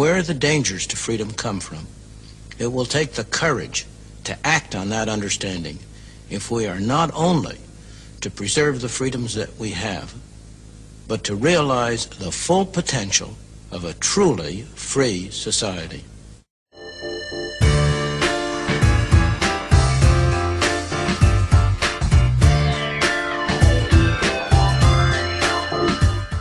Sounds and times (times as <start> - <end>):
Background music: 16.8 - 26.4.